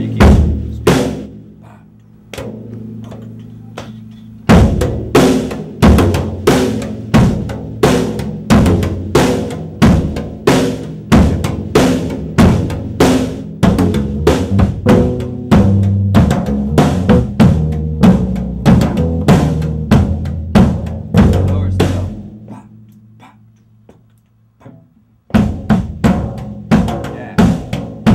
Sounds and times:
Speech: 0.0s - 1.0s, 11.2s - 11.8s, 21.3s - 23.4s, 27.1s - 27.5s.

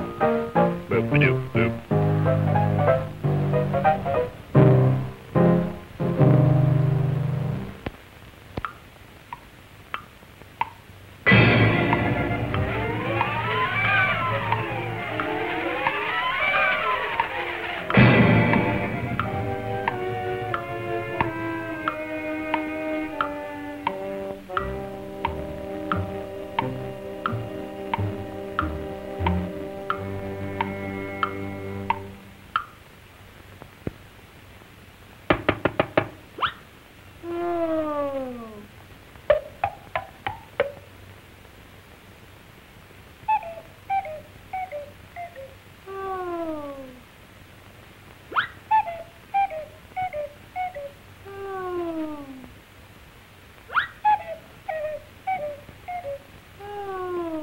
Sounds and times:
Music: 0.0s - 7.8s, 11.3s - 32.4s.

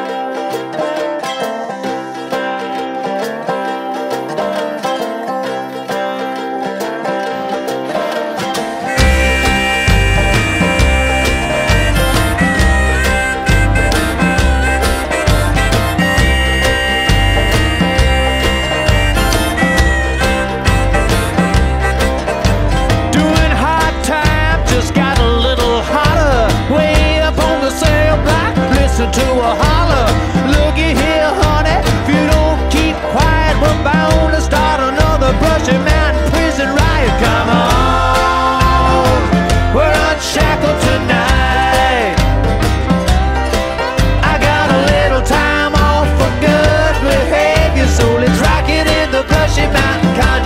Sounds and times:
Music: 0.0s - 50.4s.

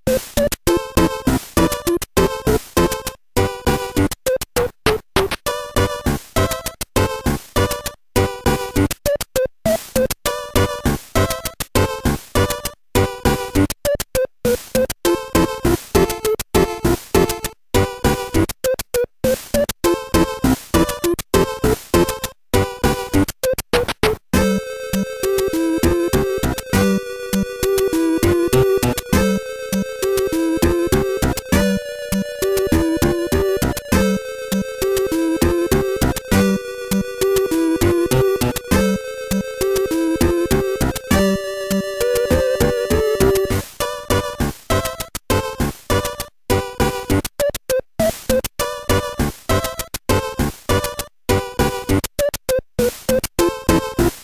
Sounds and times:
Video game music: 0.0s - 54.2s.

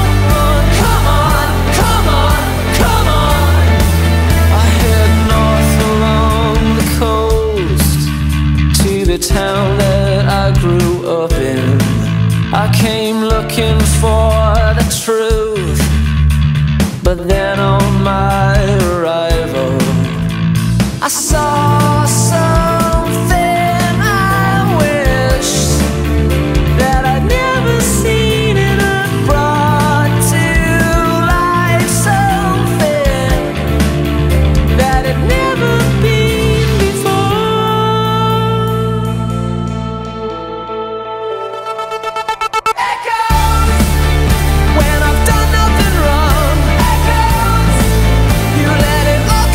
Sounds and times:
Grunge: 0.0s - 49.5s.

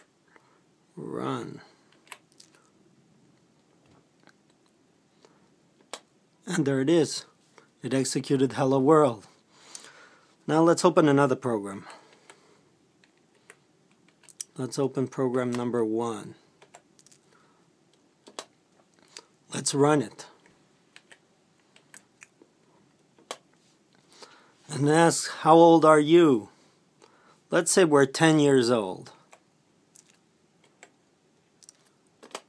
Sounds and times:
Inside, small room: 0.0s - 32.4s
Speech: 1.0s - 1.7s, 6.4s - 9.3s, 10.5s - 12.0s, 14.5s - 16.4s, 19.5s - 20.4s, 24.7s - 26.6s, 27.5s - 29.2s.

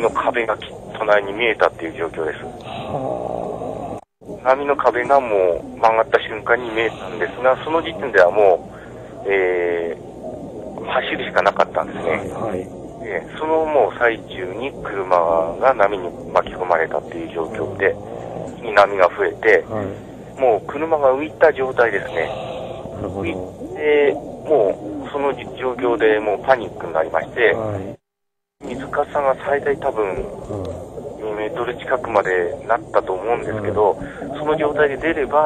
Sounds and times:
Speech: 0.0s - 3.1s, 4.4s - 10.0s, 10.8s - 28.0s, 28.6s - 35.4s.

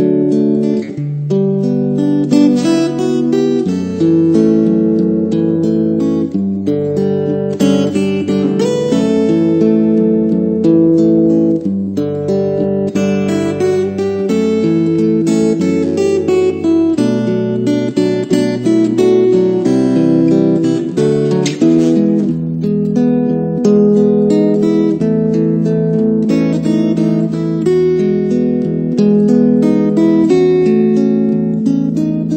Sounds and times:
Electronic tuner: 0.0s - 32.3s
Guitar: 0.0s - 32.3s.

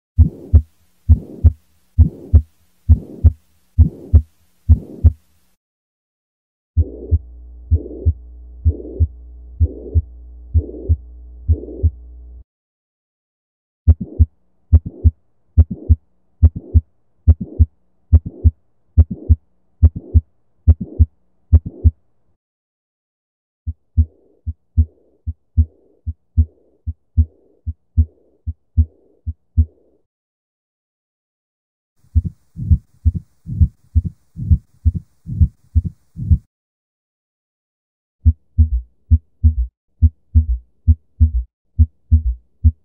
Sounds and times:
Heart murmur: 0.2s - 5.2s, 6.8s - 12.0s, 13.9s - 22.0s, 23.7s - 29.8s, 32.1s - 36.5s, 38.2s - 42.8s.

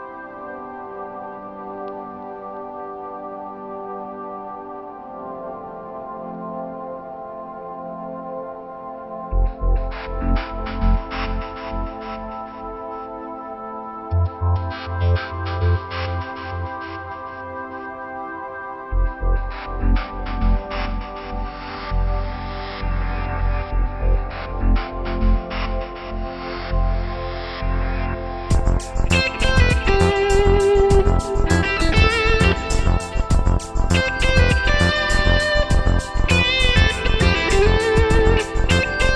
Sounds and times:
Electronica: 0.0s - 39.1s.

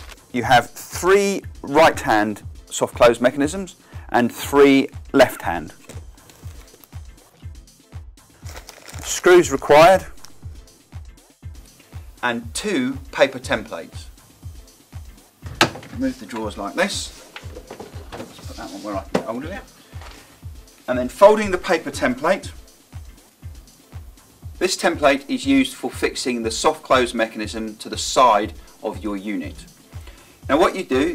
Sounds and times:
Music: 0.0s - 31.1s
Speech: 0.4s - 5.8s, 9.1s - 10.2s, 12.2s - 14.1s, 16.0s - 17.2s, 18.4s - 19.7s, 20.9s - 22.6s, 24.6s - 29.7s, 30.5s - 31.1s
Drawer open or close: 15.4s - 16.0s.

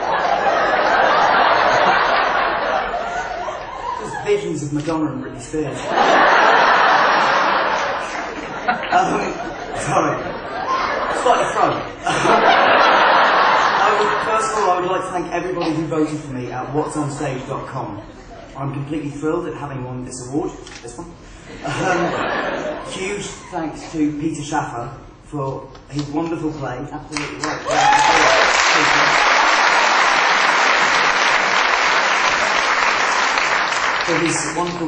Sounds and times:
Male speech, man speaking: 4.0s - 5.9s, 9.0s - 10.3s, 11.2s - 12.0s, 13.8s - 18.0s, 18.6s - 22.2s, 22.9s - 29.2s, 34.1s - 34.8s
Narration, monologue: 4.0s - 6.3s, 13.4s - 29.3s, 34.0s - 34.8s.

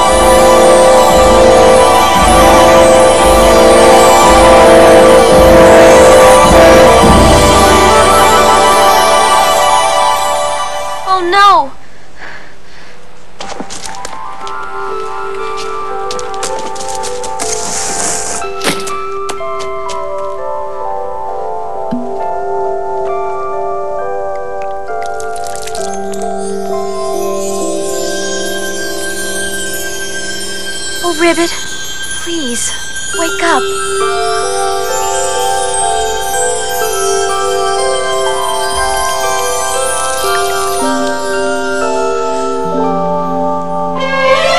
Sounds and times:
Music: 0.0s - 11.8s, 12.9s - 44.5s.

